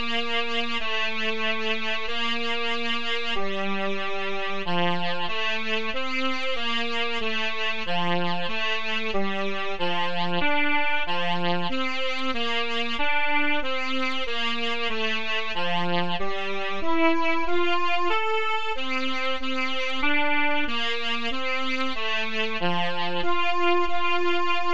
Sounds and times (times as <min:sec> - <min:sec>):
Classical music: 0:07.2 - 0:24.7.